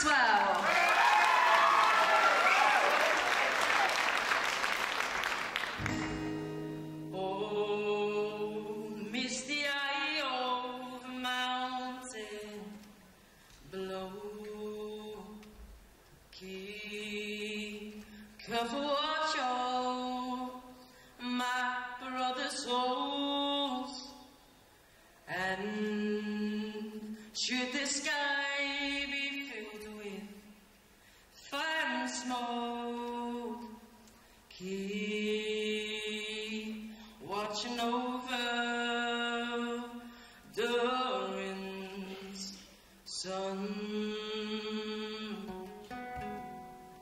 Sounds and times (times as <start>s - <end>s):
Male singing: 7.1s - 12.8s, 13.7s - 15.4s, 16.3s - 24.2s, 25.3s - 30.5s, 31.4s - 33.8s, 34.5s - 45.5s.